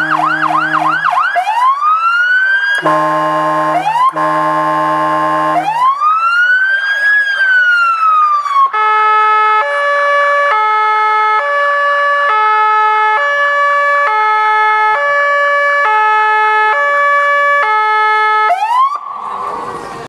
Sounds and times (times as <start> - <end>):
Vehicle: 0.0 - 1.2, 1.8 - 20.0.